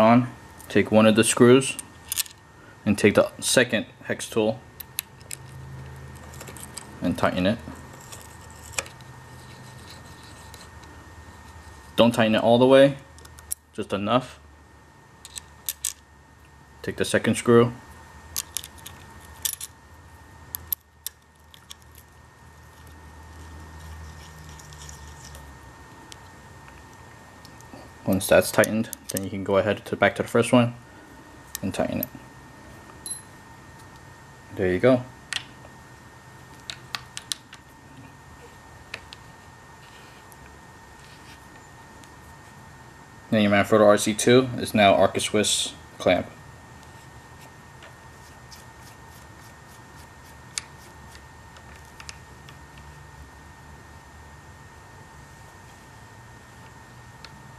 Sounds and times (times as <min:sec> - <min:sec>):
Speech: 0:00.0 - 0:01.8, 0:02.9 - 0:04.6, 0:07.0 - 0:07.7, 0:12.0 - 0:13.1, 0:13.8 - 0:14.4, 0:16.8 - 0:17.8, 0:28.1 - 0:30.8, 0:31.6 - 0:32.1, 0:34.5 - 0:35.1, 0:43.3 - 0:46.4.